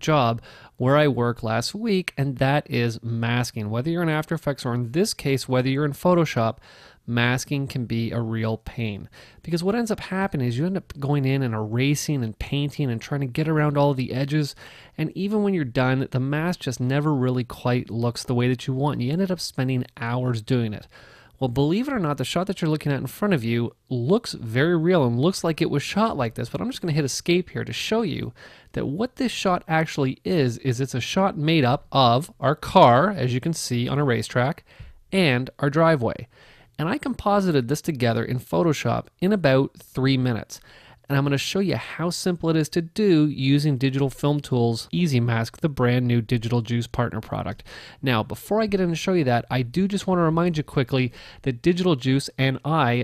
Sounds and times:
Speech: 0:00.0 - 0:53.0.

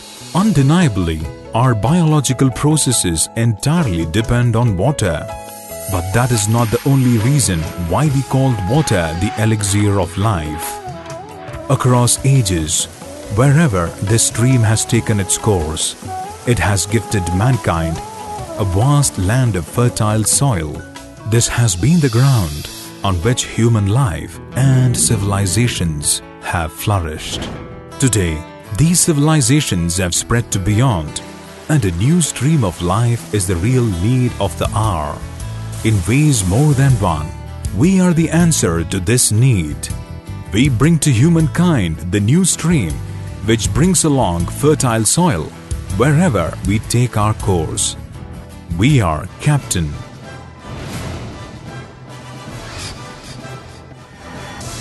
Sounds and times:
Music: 0:00.0 - 0:54.8
Speech: 0:00.4 - 0:05.3, 0:05.9 - 0:10.8, 0:11.7 - 0:48.0, 0:48.7 - 0:50.0.

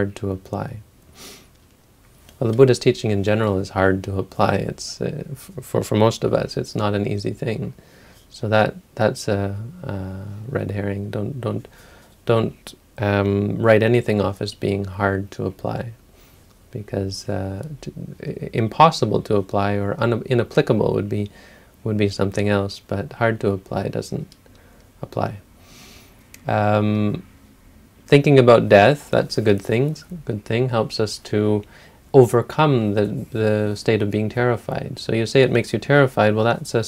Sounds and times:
Speech: 0:00.0 - 0:00.9, 0:02.4 - 0:11.7, 0:12.3 - 0:16.0, 0:16.7 - 0:24.4, 0:25.0 - 0:25.5, 0:26.4 - 0:27.3, 0:28.1 - 0:36.8.

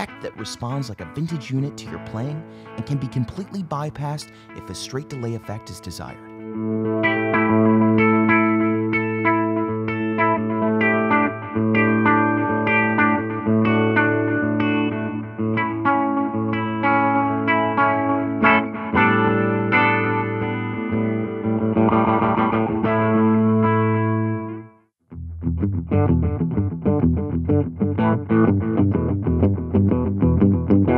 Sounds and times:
Speech: 0:00.0 - 0:06.2
Distortion: 0:00.0 - 0:30.9
Music: 0:00.0 - 0:30.9.

